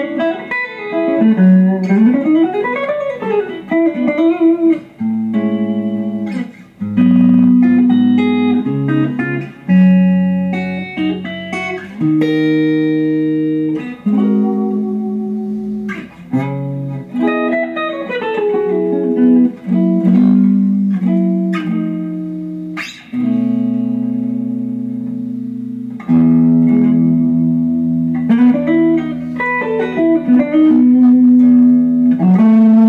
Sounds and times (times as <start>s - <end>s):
Electronic tuner: 0.0s - 32.8s
Guitar: 0.0s - 32.8s
Inside, small room: 0.0s - 32.8s.